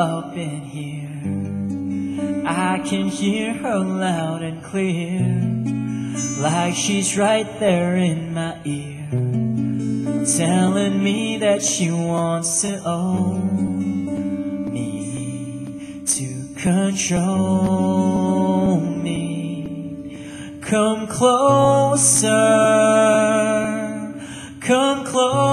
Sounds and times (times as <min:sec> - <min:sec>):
Acoustic guitar: 0:00.0 - 0:25.5.